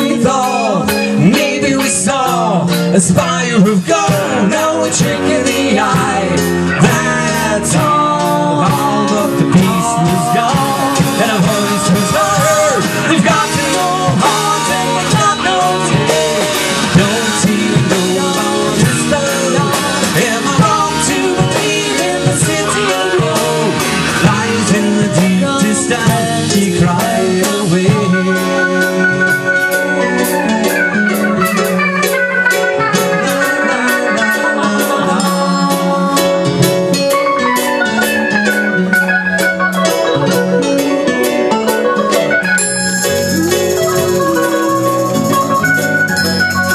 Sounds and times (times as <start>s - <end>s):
Progressive rock: 0.0s - 46.7s.